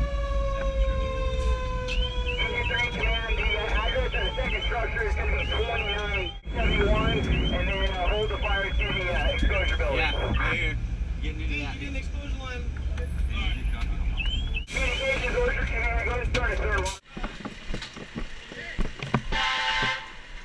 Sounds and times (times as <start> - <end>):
Emergency vehicle: 0.0 - 10.8
Speech: 2.4 - 14.0, 14.7 - 17.4.